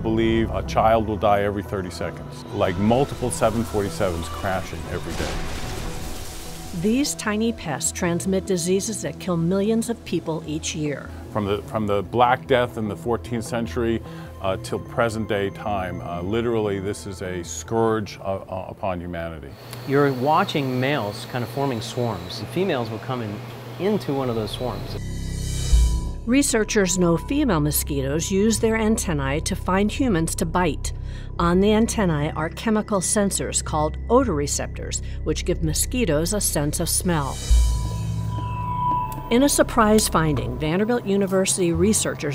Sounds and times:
Speech: 0:00.0 - 0:05.4, 0:11.4 - 0:25.0
Music: 0:00.0 - 0:19.6, 0:23.8 - 0:42.3.

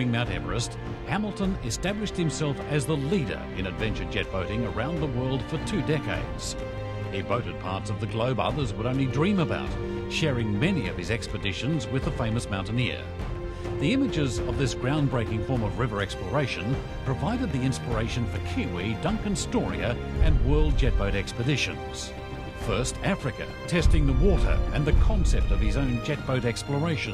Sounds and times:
Speech: 0:00.0 - 0:06.6, 0:07.2 - 0:13.1, 0:13.8 - 0:27.1
Music: 0:00.0 - 0:27.1.

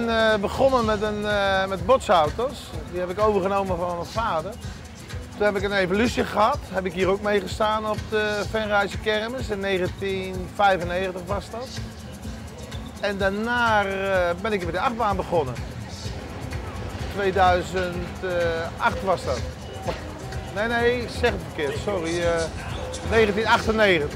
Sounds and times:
Speech: 0:00.0 - 0:04.6, 0:05.4 - 0:11.8, 0:13.0 - 0:15.6, 0:17.1 - 0:20.0, 0:20.6 - 0:24.1
Music: 0:00.0 - 0:24.1.

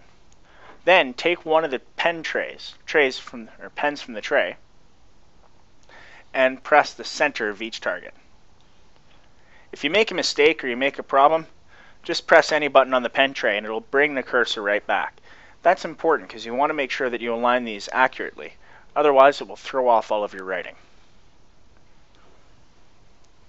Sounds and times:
Speech: 0:00.8 - 0:04.6, 0:06.3 - 0:08.2, 0:09.8 - 0:20.8.

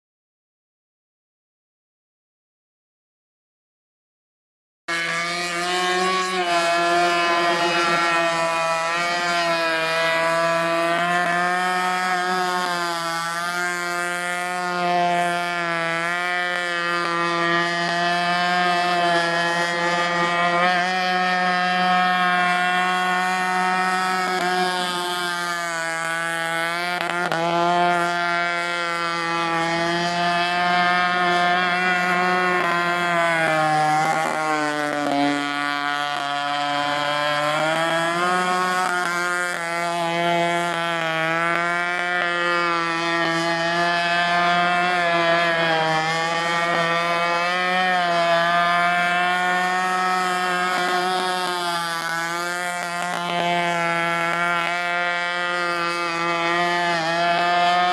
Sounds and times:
Motorboat, speedboat: 0:04.9 - 0:57.9.

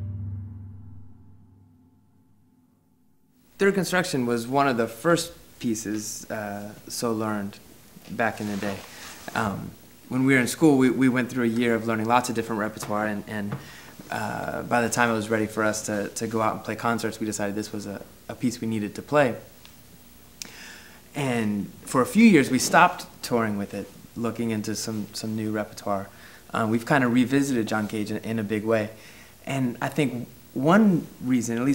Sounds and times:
Speech: 0:03.6 - 0:19.5, 0:21.2 - 0:31.7.

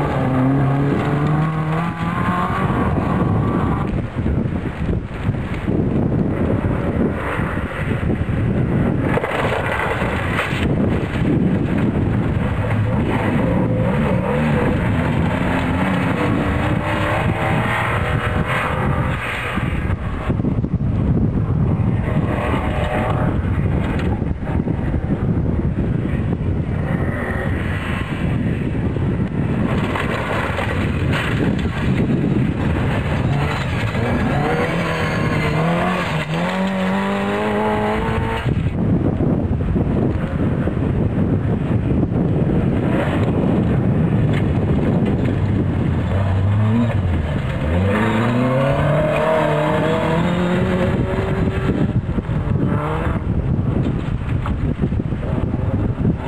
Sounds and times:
Outside, rural or natural: 0:00.0 - 0:56.2
Race car, auto racing: 0:00.0 - 0:56.2.

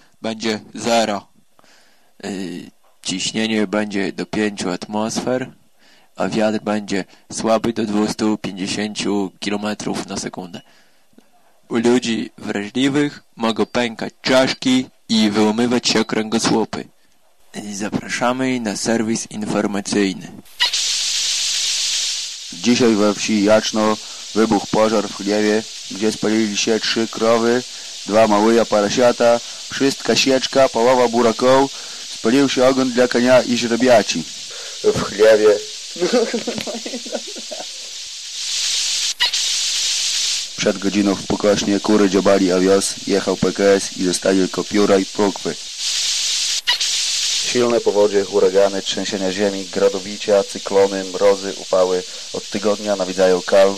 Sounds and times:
Speech: 0:00.2 - 0:01.3, 0:02.2 - 0:05.6, 0:06.2 - 0:10.6, 0:11.2 - 0:16.9, 0:17.5 - 0:20.4, 0:22.6 - 0:37.1, 0:40.6 - 0:45.6, 0:47.4 - 0:53.7.

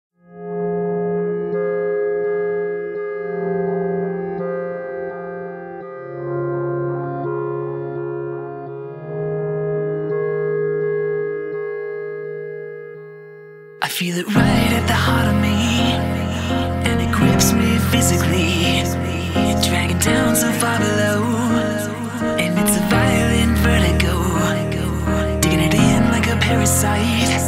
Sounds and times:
Music: 0:00.2 - 0:27.4.

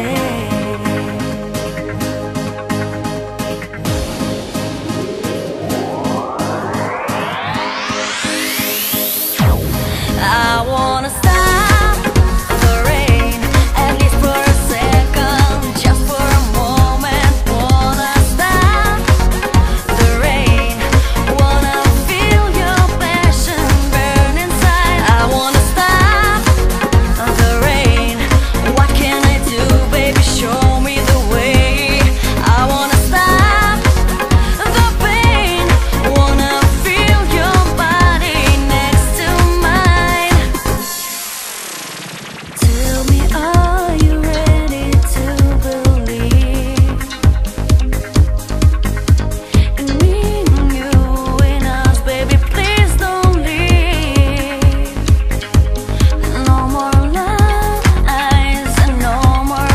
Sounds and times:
Music: 0:00.0 - 0:59.7.

